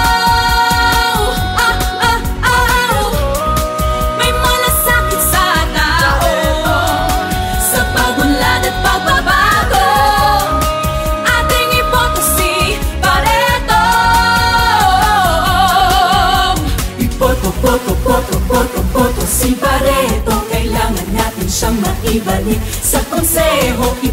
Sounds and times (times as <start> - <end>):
Jingle (music): 0.0 - 24.1
Music of Asia: 0.0 - 24.1.